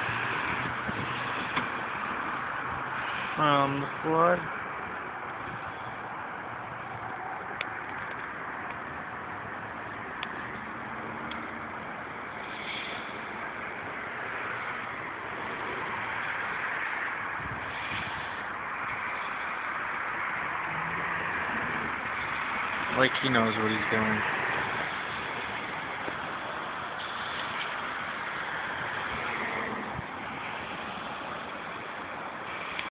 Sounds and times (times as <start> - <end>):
Car passing by: 0.0 - 32.9
Speech: 3.4 - 4.5, 22.9 - 24.3.